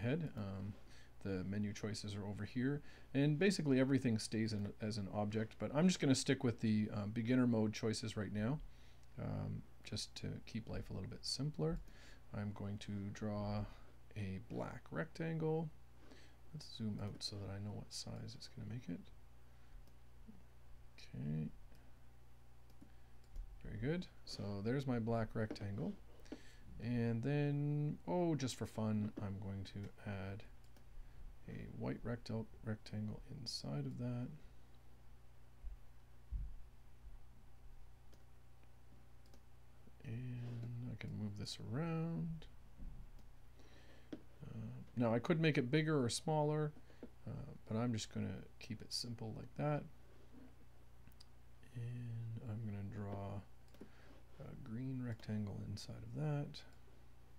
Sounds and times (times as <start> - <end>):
Speech: 0.0 - 8.6, 9.2 - 15.8, 16.5 - 19.1, 21.0 - 21.6, 23.6 - 26.0, 26.8 - 30.5, 31.5 - 34.4, 40.0 - 42.5, 44.4 - 49.9, 51.7 - 53.5, 54.4 - 56.7.